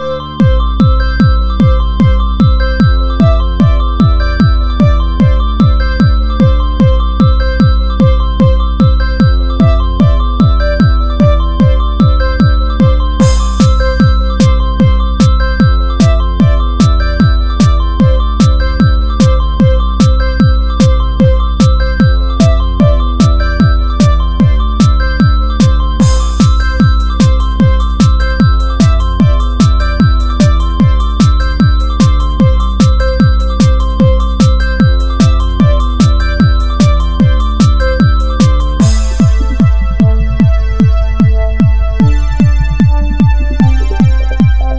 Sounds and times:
Techno: 0:00.0 - 0:44.7.

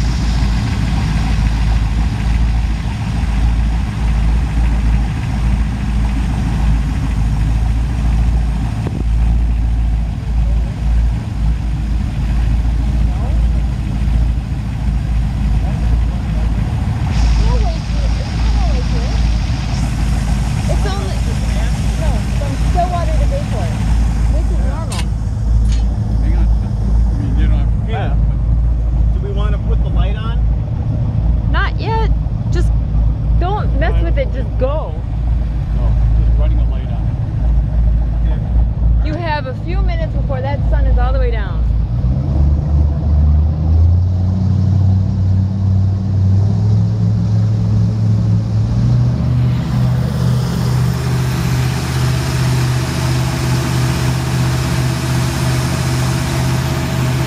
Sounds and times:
Speech: 0:13.0 - 0:13.6, 0:17.4 - 0:19.2, 0:26.2 - 0:28.4, 0:29.2 - 0:30.4, 0:31.6 - 0:32.7, 0:33.4 - 0:35.0, 0:35.8 - 0:37.1, 0:38.2 - 0:38.4, 0:39.0 - 0:41.7.

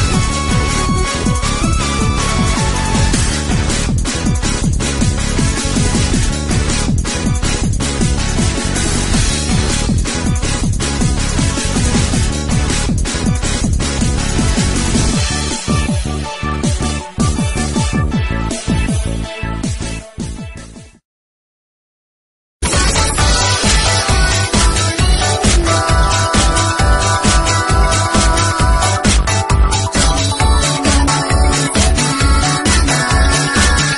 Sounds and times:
Music: 0:00.0 - 0:21.0, 0:22.6 - 0:33.9.

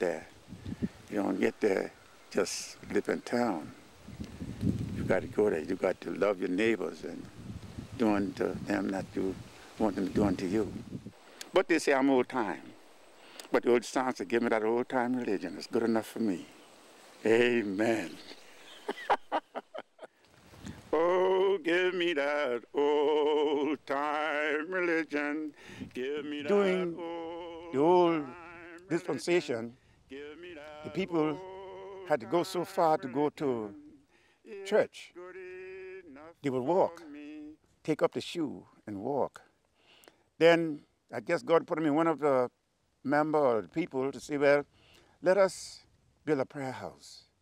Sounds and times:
Speech: 0:00.0 - 0:00.3, 0:01.1 - 0:03.7, 0:05.0 - 0:07.3, 0:08.0 - 0:10.8, 0:11.5 - 0:12.7, 0:13.5 - 0:16.5, 0:17.2 - 0:18.4, 0:26.5 - 0:27.0, 0:27.8 - 0:28.2, 0:28.9 - 0:29.7, 0:30.9 - 0:31.4, 0:32.1 - 0:33.8, 0:34.5 - 0:35.1, 0:36.4 - 0:39.4, 0:40.4 - 0:42.5, 0:43.1 - 0:47.3.

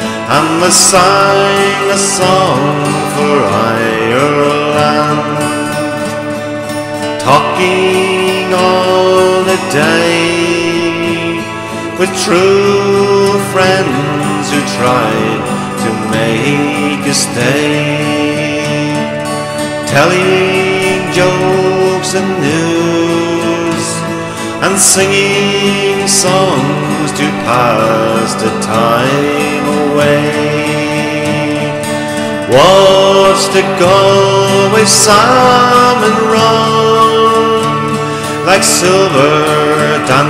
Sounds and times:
Country: 0:00.0 - 0:40.3.

